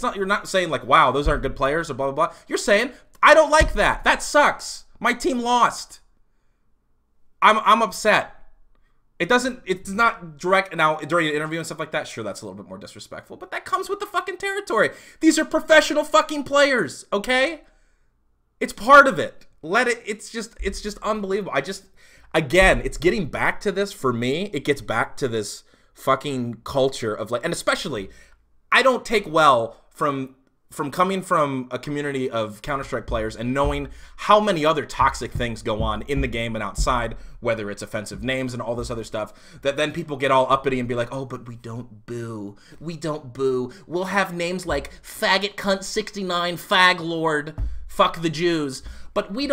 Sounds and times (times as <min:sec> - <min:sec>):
Speech: 0:00.0 - 0:06.1, 0:07.4 - 0:08.4, 0:09.2 - 0:17.7, 0:18.6 - 0:28.1, 0:28.7 - 0:49.5.